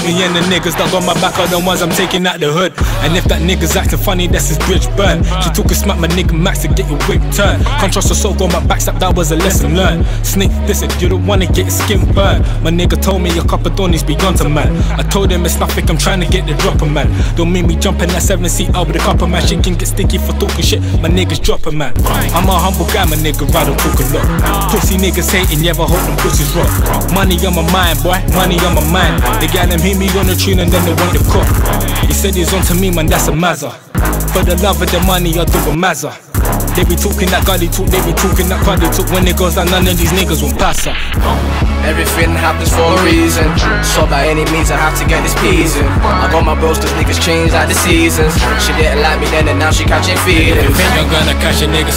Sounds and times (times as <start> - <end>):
Music: 0.0 - 51.9.